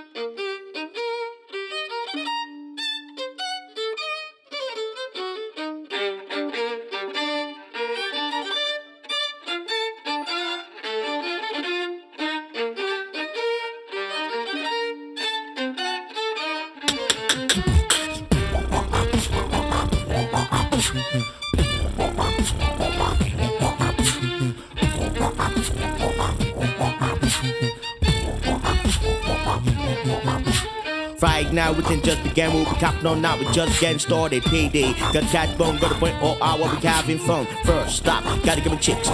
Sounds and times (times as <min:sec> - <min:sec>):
Violin, fiddle: 0:00.0 - 0:39.1.